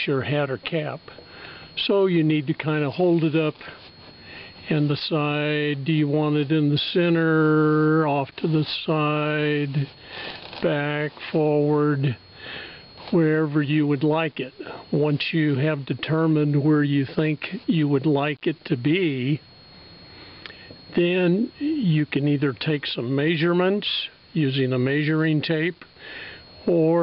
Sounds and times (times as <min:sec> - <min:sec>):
Speech: 0:00.0 - 0:01.2, 0:01.8 - 0:03.9, 0:04.6 - 0:10.0, 0:10.6 - 0:12.3, 0:13.0 - 0:19.5, 0:20.9 - 0:25.9, 0:26.6 - 0:27.0.